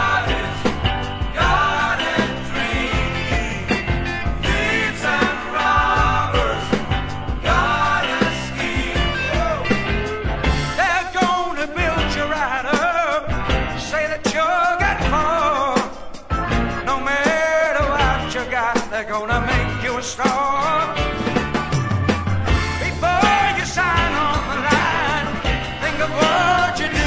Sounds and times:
Music: 0.0s - 27.0s.

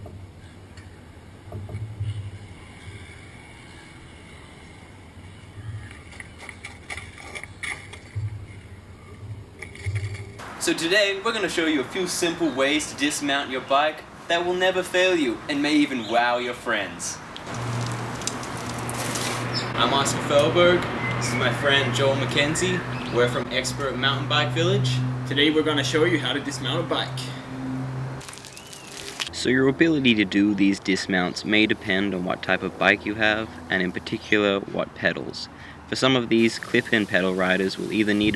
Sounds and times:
Speech: 10.6s - 17.2s, 19.8s - 27.4s, 29.3s - 38.3s
Bicycle: 17.4s - 19.8s, 28.2s - 29.3s.

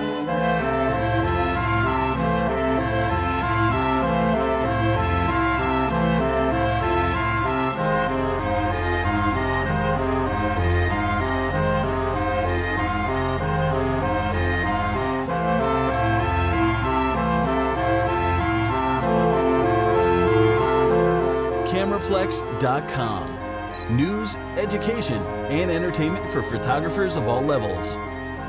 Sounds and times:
Music: 0.0s - 28.4s
Speech: 21.7s - 28.0s.

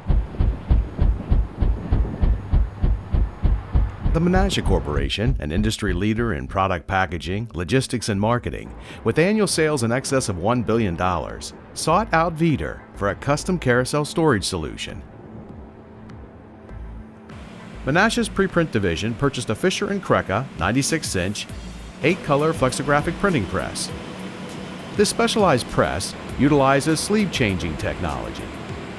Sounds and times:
Speech: 4.2s - 15.0s, 17.9s - 24.0s, 25.0s - 28.5s
Music: 8.4s - 28.9s.

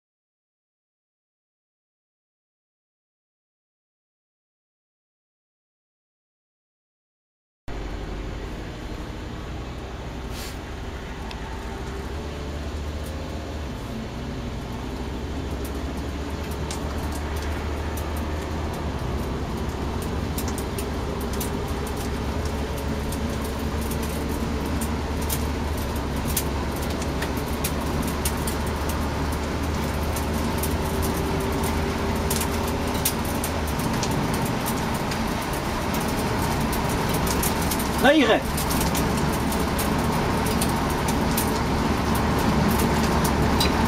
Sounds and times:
Bicycle: 7.7s - 43.8s.

